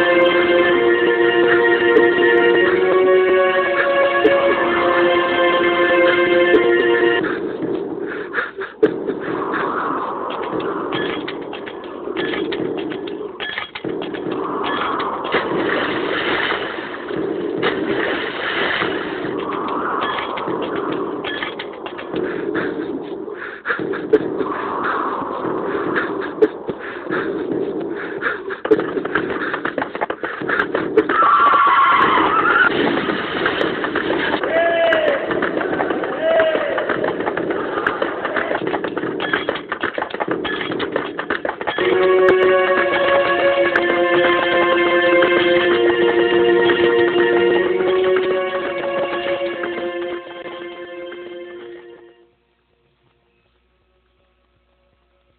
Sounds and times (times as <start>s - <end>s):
Sound effect: 8.8s - 23.2s, 28.7s - 34.5s.